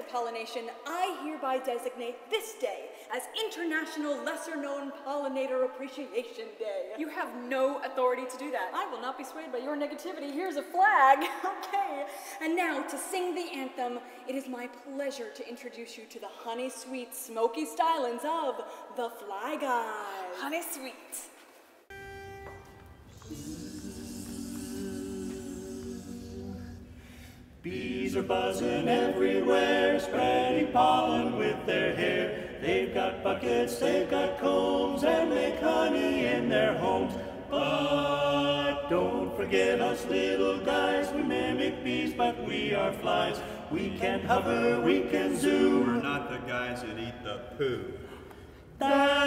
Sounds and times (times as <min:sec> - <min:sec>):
Female speech, woman speaking: 0:00.0 - 0:21.4.